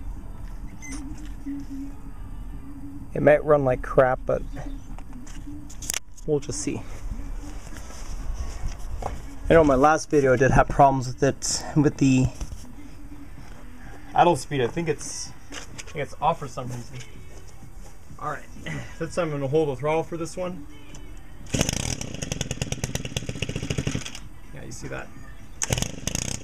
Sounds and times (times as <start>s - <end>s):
Power tool: 21.5s - 24.2s, 25.6s - 26.4s.